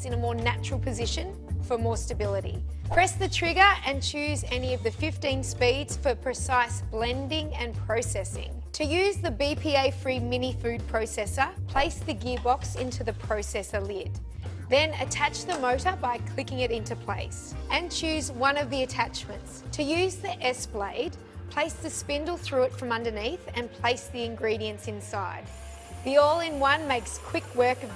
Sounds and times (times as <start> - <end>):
Speech: 0.0 - 25.4, 26.1 - 27.9
Music: 0.0 - 27.9.